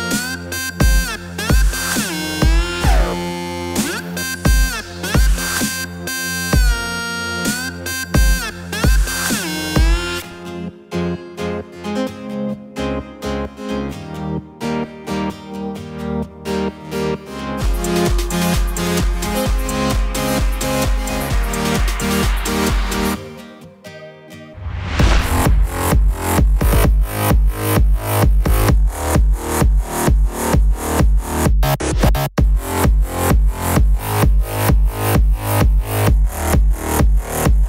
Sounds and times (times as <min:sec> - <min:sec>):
Music: 0:00.0 - 0:37.6.